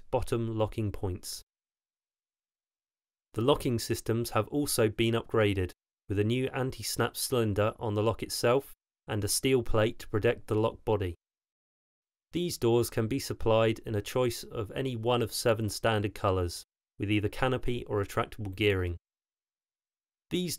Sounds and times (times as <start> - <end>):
Speech: 0.0 - 1.4, 3.4 - 11.2, 12.4 - 19.0, 20.3 - 20.5.